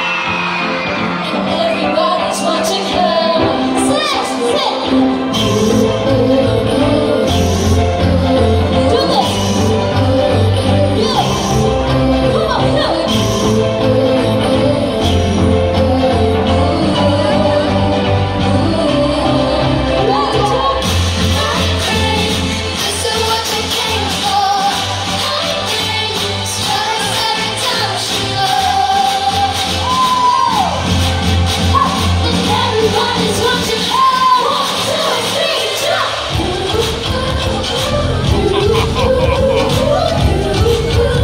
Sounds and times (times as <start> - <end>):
Female singing: 1.2 - 30.8, 31.7 - 41.2.